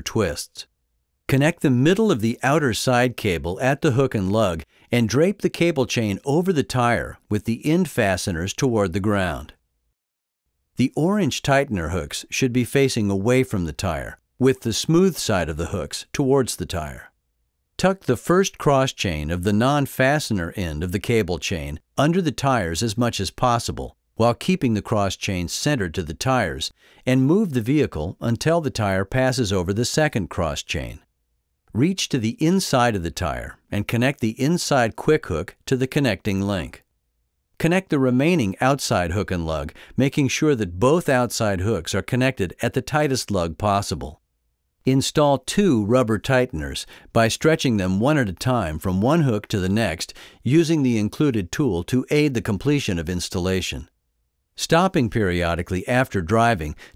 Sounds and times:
Speech: 0.0s - 0.7s, 1.3s - 9.6s, 10.8s - 17.2s, 17.8s - 31.1s, 31.7s - 36.8s, 37.6s - 44.2s, 44.9s - 53.9s, 54.6s - 56.9s.

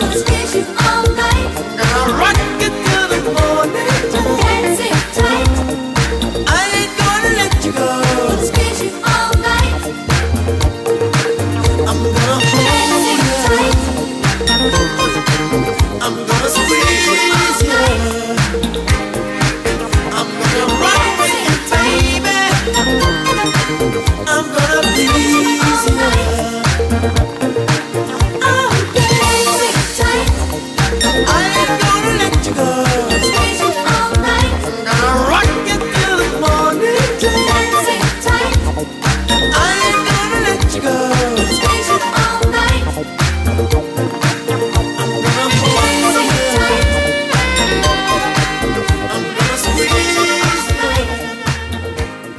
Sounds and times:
Reggae: 0.0s - 52.3s.

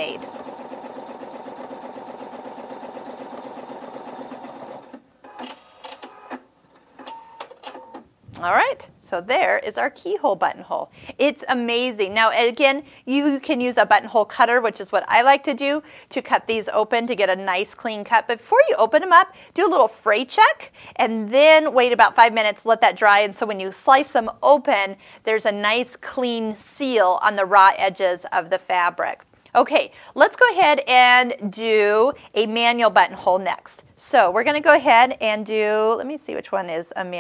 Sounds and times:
Speech: 0.0s - 0.2s, 8.4s - 37.2s
Sewing machine: 0.0s - 6.4s.

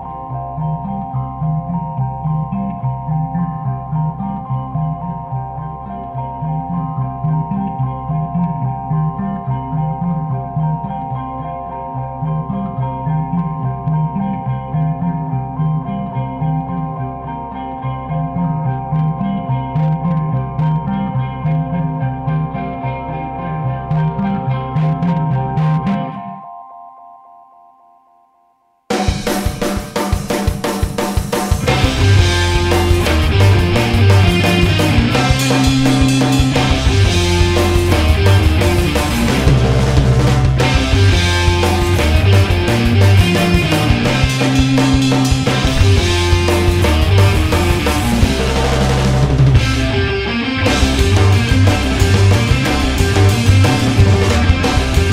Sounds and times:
Music: 0.0s - 55.1s.

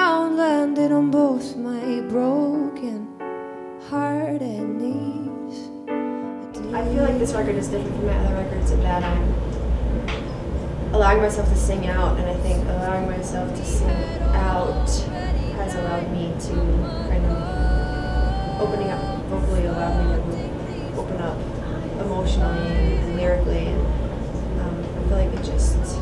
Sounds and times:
Music: 0.0s - 9.4s, 11.0s - 26.0s
Speech: 6.6s - 9.4s, 11.0s - 17.5s, 18.5s - 23.9s, 24.5s - 26.0s.

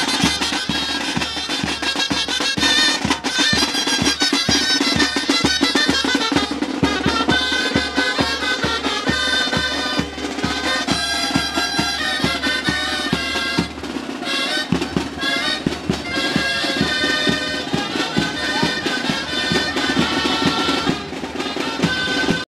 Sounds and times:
Independent music: 0.0s - 22.4s
Traditional music: 0.0s - 22.5s.

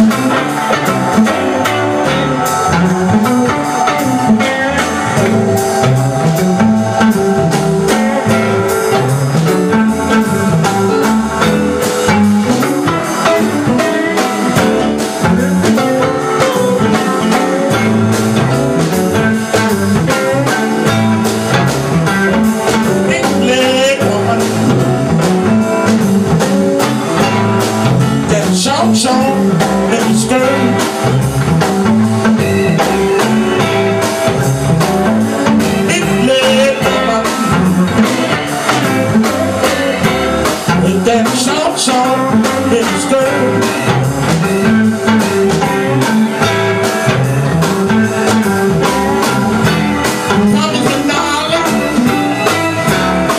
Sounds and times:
Music: 0.0s - 53.3s.

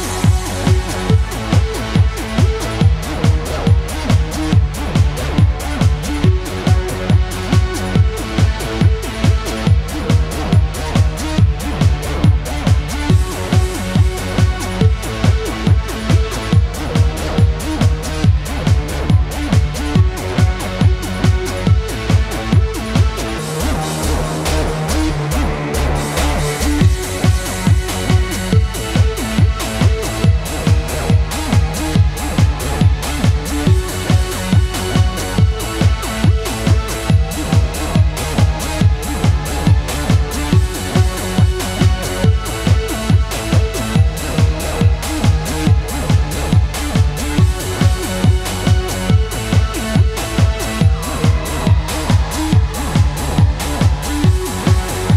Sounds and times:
Exciting music: 0.0s - 55.1s
Techno: 0.0s - 55.1s.

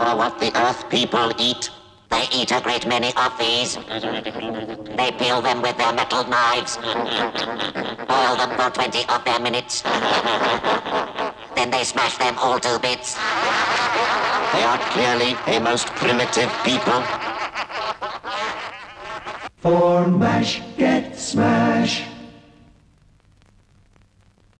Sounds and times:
Speech: 0.0s - 7.1s, 8.1s - 10.0s, 11.6s - 13.4s, 14.5s - 17.2s
Music: 19.7s - 22.6s.

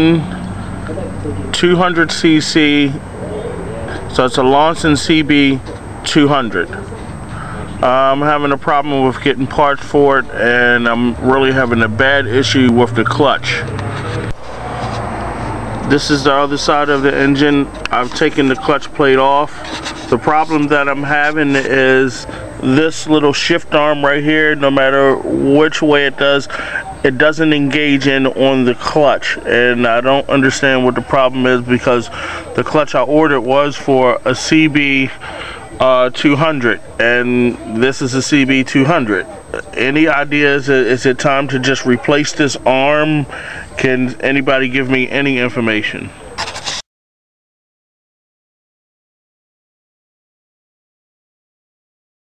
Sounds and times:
Speech: 0.0s - 13.7s, 15.9s - 46.5s.

